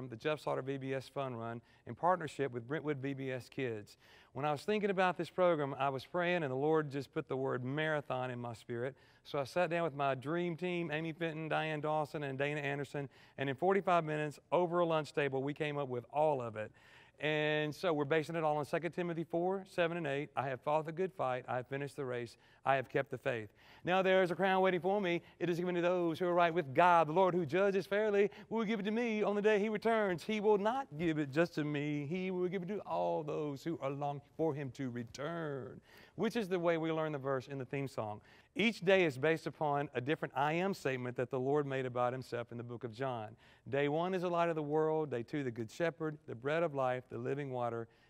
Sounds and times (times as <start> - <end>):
Speech: 0.0 - 47.9.